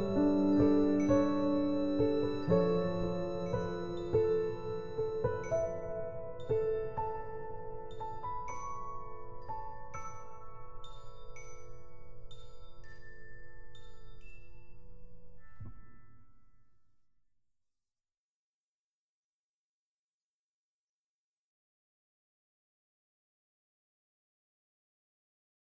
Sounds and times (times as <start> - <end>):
Music for children: 0.0 - 16.6.